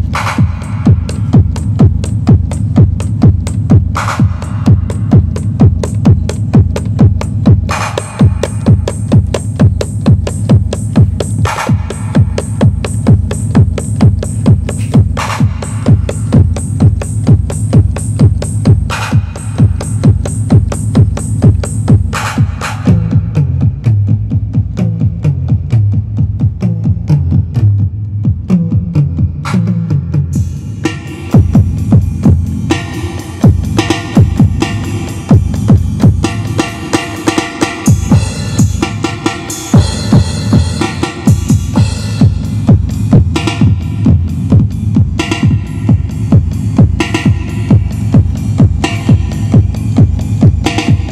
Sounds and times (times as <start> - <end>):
Drum machine: 0.0 - 51.1.